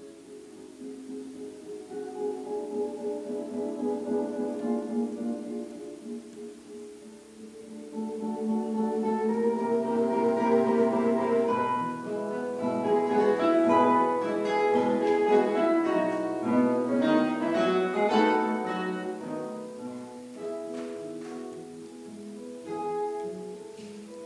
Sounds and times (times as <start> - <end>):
Strum: 0.0 - 24.2.